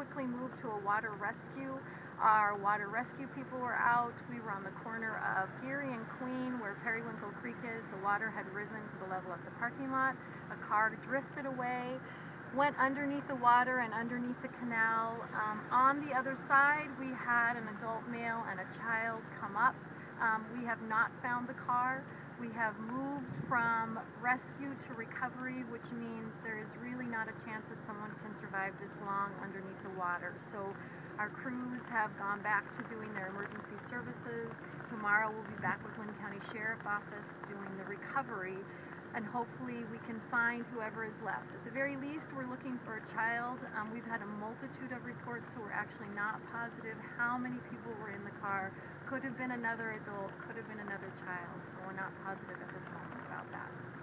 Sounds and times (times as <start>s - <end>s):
Speech: 0.0s - 53.8s.